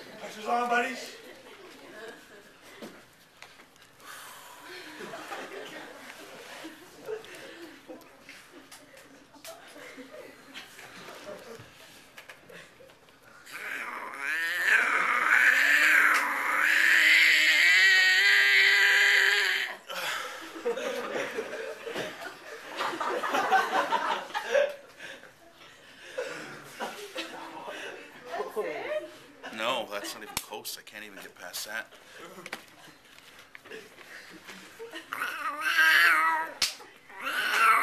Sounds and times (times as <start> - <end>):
Speech: 28.3 - 31.9.